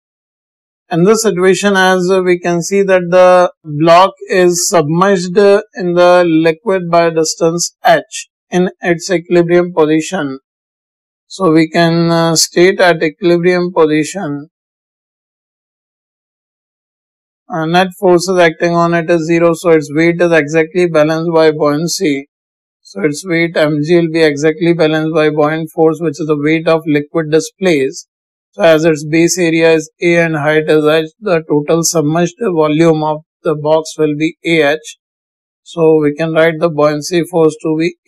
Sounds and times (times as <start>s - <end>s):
Speech: 0.9s - 10.4s, 11.3s - 14.5s, 17.5s - 22.3s, 22.9s - 28.0s, 28.6s - 35.0s, 35.7s - 38.0s.